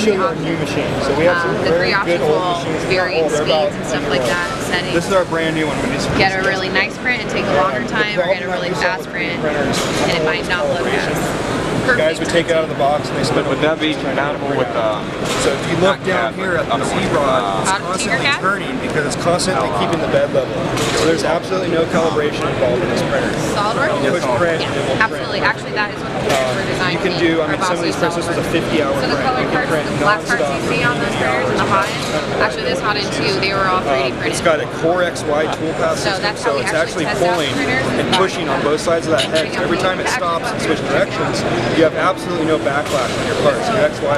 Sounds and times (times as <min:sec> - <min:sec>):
Speech: 0:00.0 - 0:44.1.